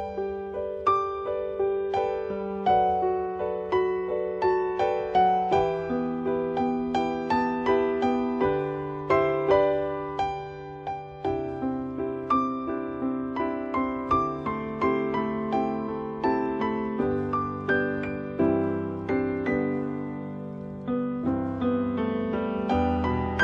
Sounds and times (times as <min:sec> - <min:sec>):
New-age music: 0:00.0 - 0:23.4.